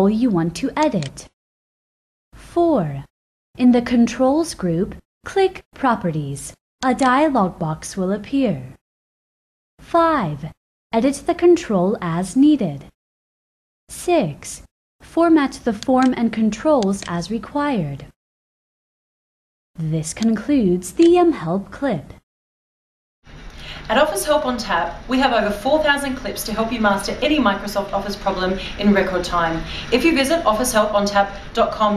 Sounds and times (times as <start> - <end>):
Speech: 0.0 - 1.3, 2.6 - 8.8, 9.9 - 12.9, 13.9 - 18.1, 19.8 - 22.2, 23.9 - 31.9.